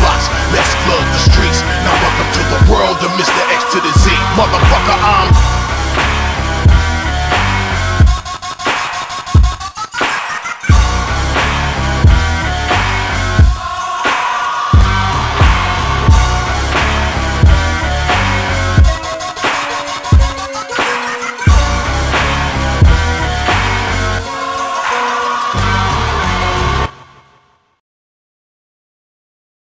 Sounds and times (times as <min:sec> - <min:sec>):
Singing: 0:00.0 - 0:05.4, 0:13.4 - 0:16.2, 0:24.2 - 0:26.2
Music: 0:00.0 - 0:27.8.